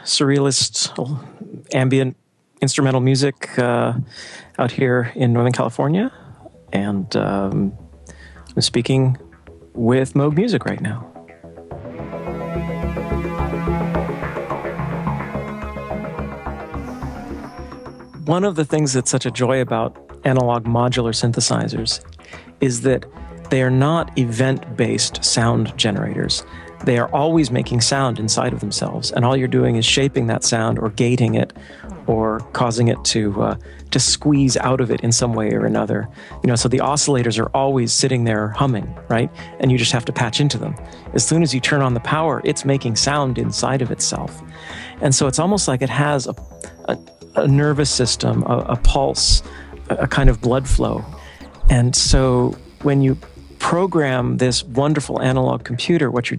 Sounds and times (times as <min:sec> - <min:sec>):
Speech: 0:00.0 - 0:07.8, 0:08.5 - 0:09.2, 0:09.8 - 0:11.1, 0:18.2 - 0:56.3
Music: 0:03.0 - 0:56.3.